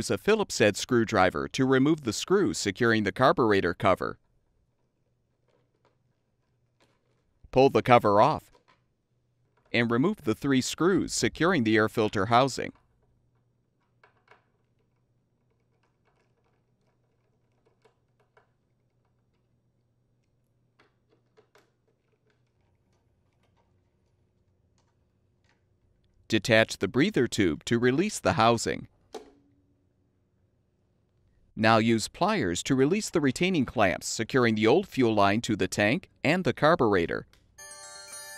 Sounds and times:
Speech: 0.0 - 4.2, 7.5 - 8.5, 9.8 - 12.8, 26.3 - 28.9, 31.6 - 37.3.

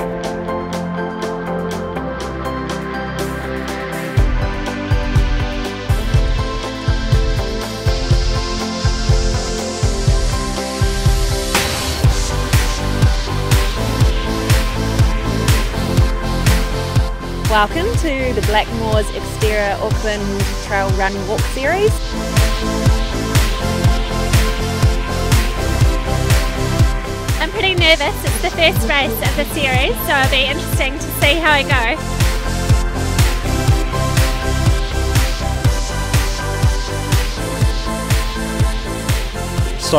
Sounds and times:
Music: 0.0 - 39.9
Speech: 17.5 - 22.0, 27.4 - 32.0.

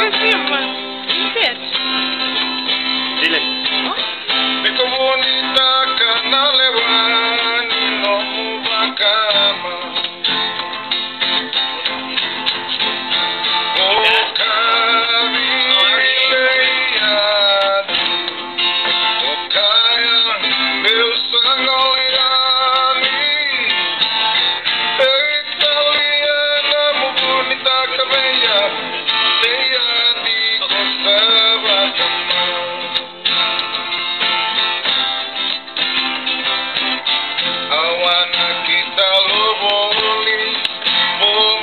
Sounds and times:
Music: 0.0 - 41.6.

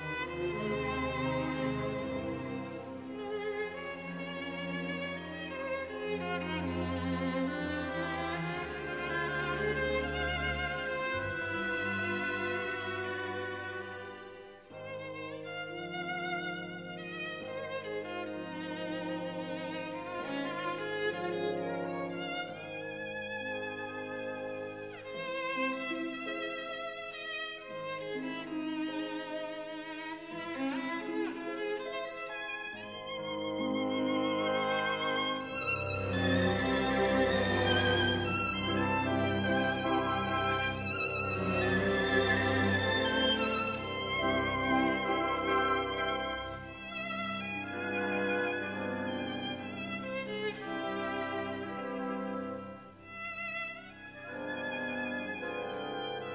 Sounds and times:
Violin, fiddle: 0.0 - 56.3.

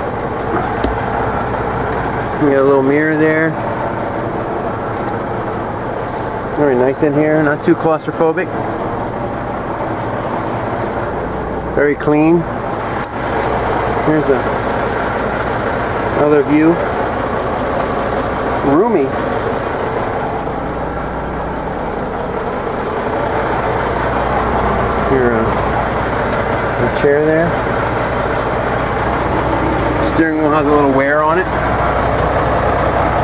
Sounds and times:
Vehicle: 0.0 - 33.2
Speech: 2.3 - 3.6, 6.5 - 8.6, 11.8 - 12.5, 14.0 - 14.5, 16.1 - 16.8, 18.6 - 19.2, 25.0 - 25.6, 26.8 - 27.6, 30.0 - 31.6.

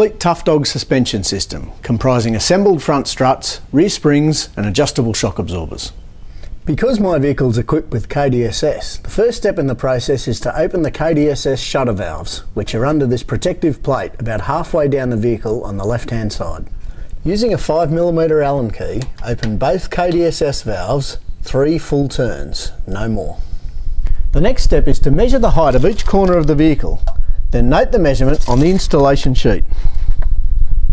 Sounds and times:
Speech: 0.0 - 6.0, 6.6 - 23.4, 24.3 - 29.7.

